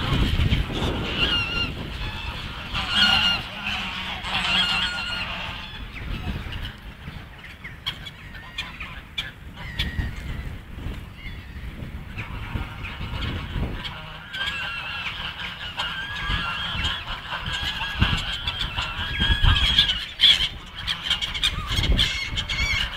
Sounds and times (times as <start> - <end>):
Quack: 0.0 - 10.4, 12.2 - 22.9.